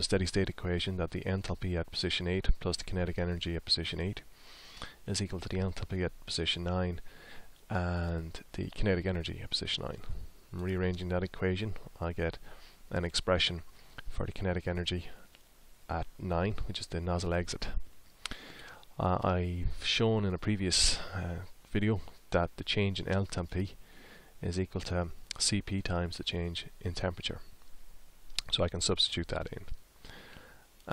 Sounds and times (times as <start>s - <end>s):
Speech: 0.0s - 4.3s, 5.1s - 7.0s, 7.7s - 15.2s, 15.9s - 17.8s, 19.0s - 23.8s, 24.4s - 27.5s, 28.4s - 29.8s.